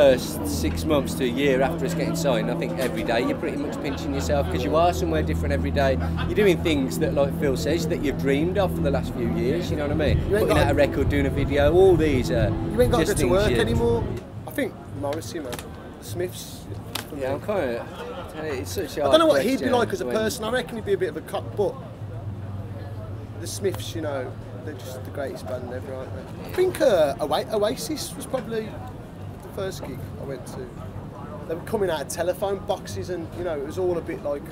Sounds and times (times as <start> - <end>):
Speech: 0.0 - 34.5.